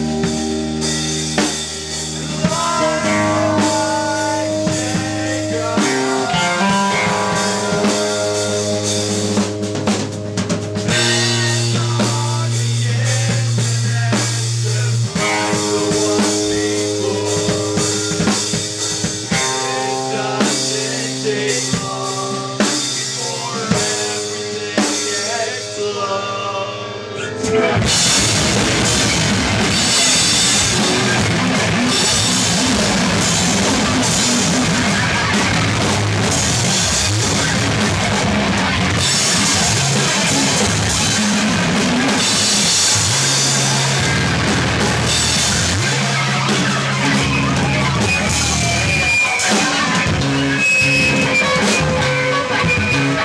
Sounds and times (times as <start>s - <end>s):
Music: 0.0s - 53.2s.